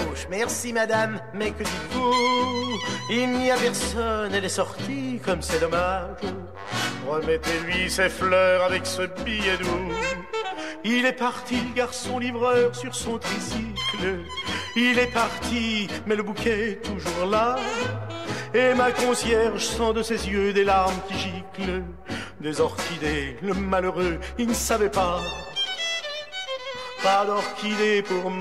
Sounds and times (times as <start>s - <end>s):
Music: 0.0s - 28.4s.